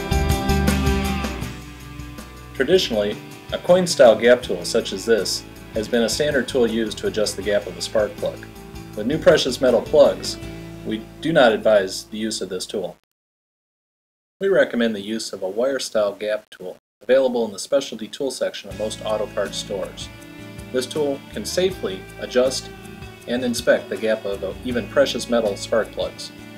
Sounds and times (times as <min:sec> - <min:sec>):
Music: 0:00.0 - 0:12.4, 0:18.7 - 0:26.5
Speech: 0:02.6 - 0:13.0, 0:14.4 - 0:20.1, 0:20.7 - 0:22.7, 0:23.3 - 0:26.4.